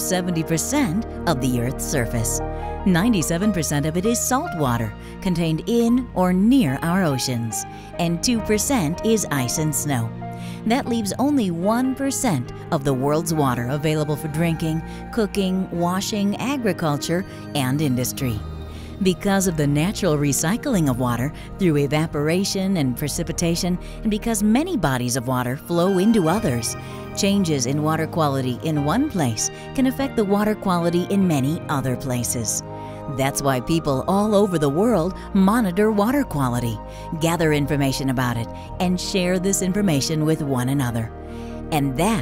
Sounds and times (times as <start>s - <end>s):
Speech: 0.0s - 10.1s, 10.7s - 18.4s, 19.0s - 41.1s, 41.7s - 42.2s
Music: 0.0s - 42.2s.